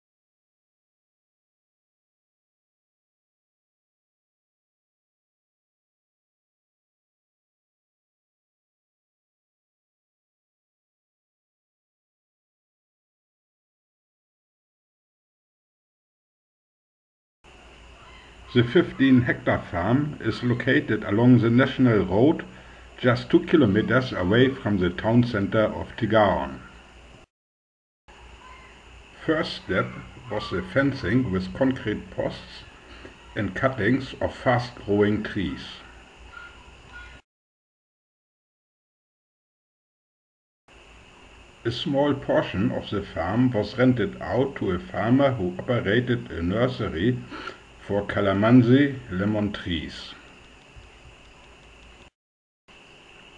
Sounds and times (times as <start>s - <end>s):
Speech: 18.5s - 26.7s, 29.2s - 32.7s, 33.3s - 35.9s, 41.7s - 50.2s.